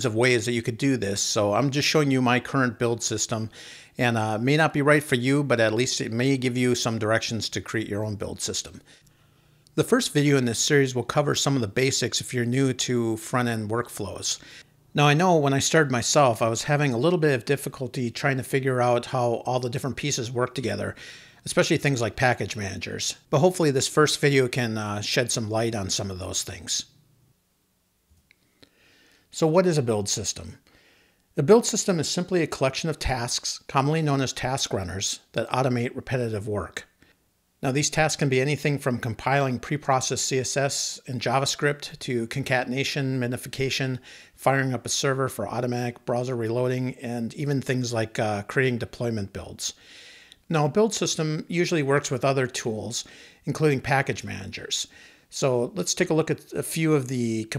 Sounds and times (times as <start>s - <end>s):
Speech: 0.0s - 8.9s, 9.8s - 27.0s, 29.3s - 30.6s, 31.4s - 36.9s, 37.6s - 49.8s, 50.5s - 57.5s.